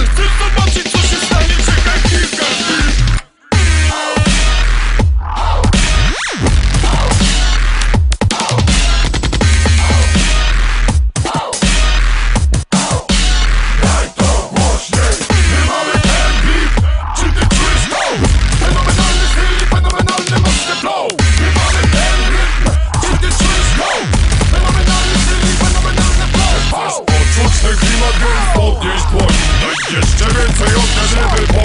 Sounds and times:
Dubstep: 0.0 - 31.6.

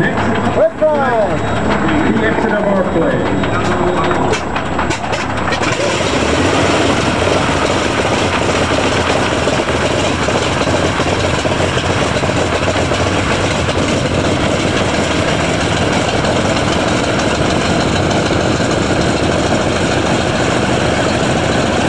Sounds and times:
Heavy engine (low frequency): 0.0 - 21.8
Aircraft: 1.4 - 21.8.

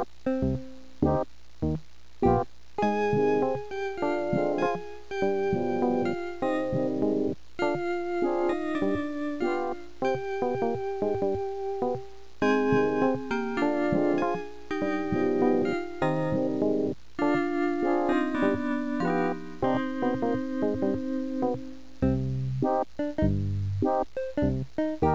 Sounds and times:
Music: 0.0 - 25.1.

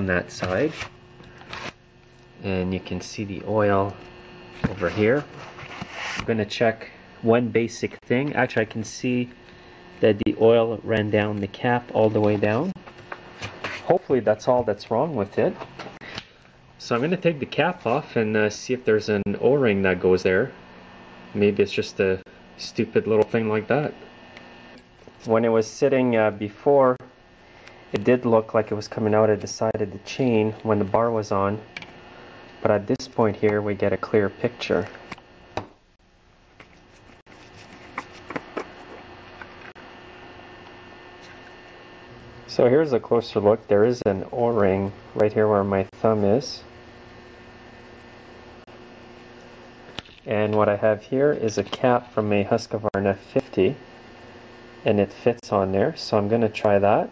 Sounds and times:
Speech: 0.0 - 0.8, 2.4 - 4.0, 4.7 - 5.3, 6.3 - 9.4, 10.0 - 12.8, 13.9 - 15.6, 16.8 - 20.6, 21.4 - 24.0, 25.2 - 27.1, 28.0 - 31.7, 32.6 - 34.9, 42.5 - 46.7, 50.3 - 53.8, 54.8 - 57.1.

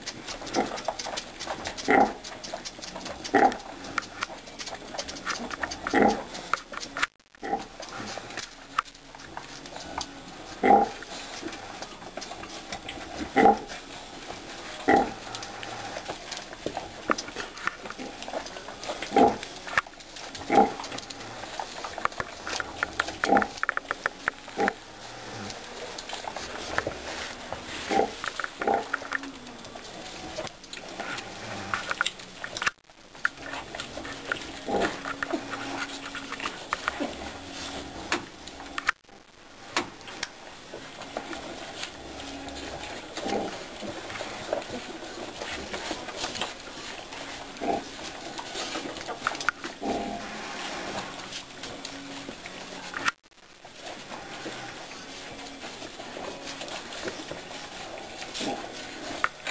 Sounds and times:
Pig: 0.0 - 39.0, 39.7 - 59.5
Domestic animals, pets: 0.1 - 32.7.

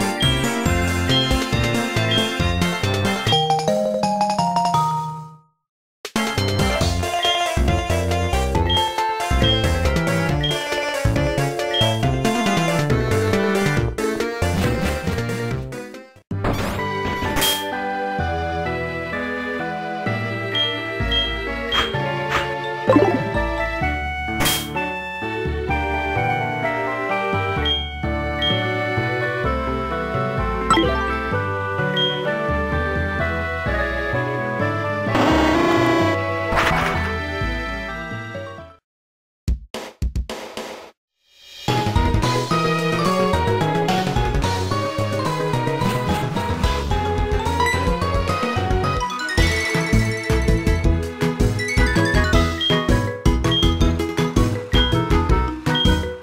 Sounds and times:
Video game music: 0.0 - 38.8, 41.7 - 56.2.

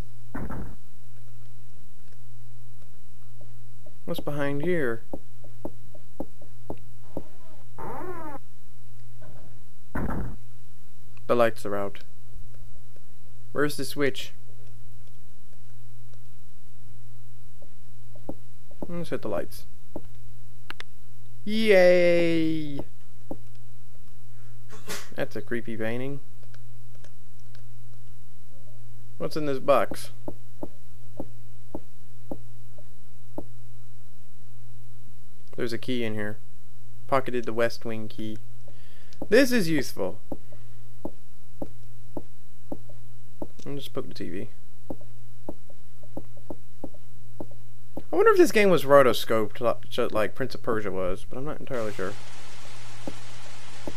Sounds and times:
Speech: 4.0 - 5.0, 11.3 - 12.1, 13.5 - 14.4, 18.8 - 19.7, 21.4 - 22.9, 25.1 - 26.2, 29.2 - 30.2, 35.6 - 36.4, 37.1 - 38.4, 39.3 - 40.2, 43.6 - 44.6, 48.1 - 52.2.

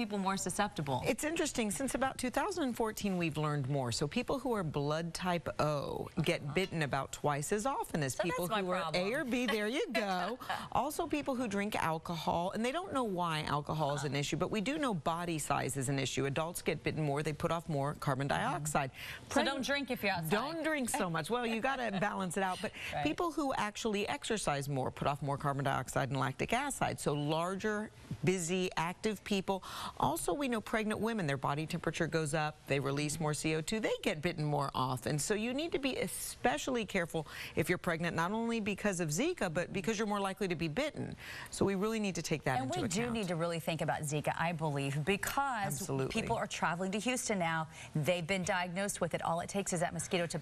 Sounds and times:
Speech: 0.0 - 23.6.

